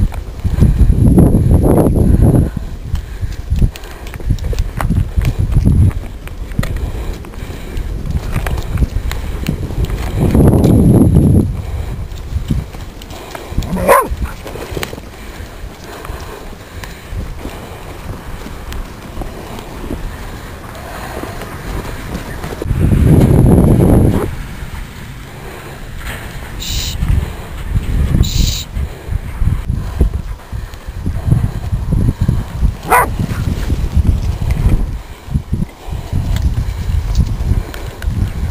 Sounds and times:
Dog: 0:13.7 - 0:14.4, 0:32.9 - 0:33.1.

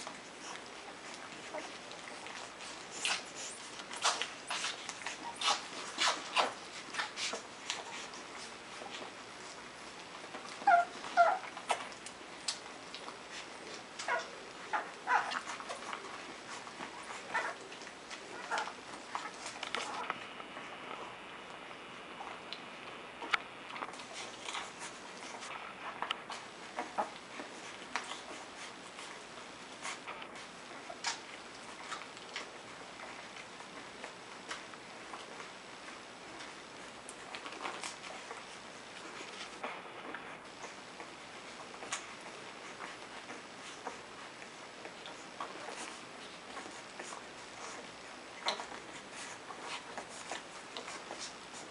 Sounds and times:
Dog: 0:00.0 - 0:51.7
Inside, small room: 0:00.0 - 0:51.7.

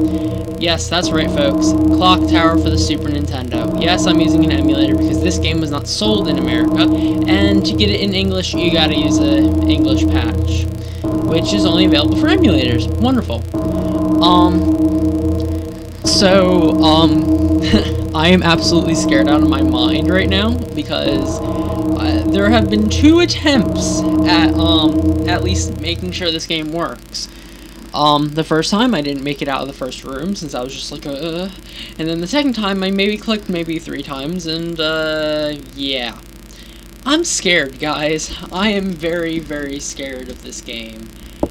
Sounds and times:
Speech: 0:00.0 - 0:13.5, 0:14.2 - 0:14.6, 0:16.0 - 0:27.3, 0:27.9 - 0:36.2, 0:37.0 - 0:41.2.

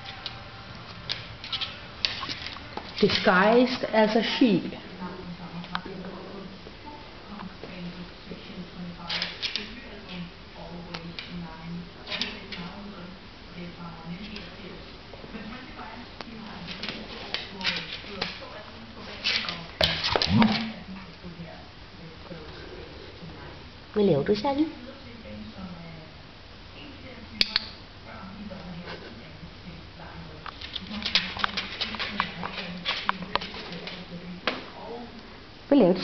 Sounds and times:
Speech: 0:03.0 - 0:25.9.

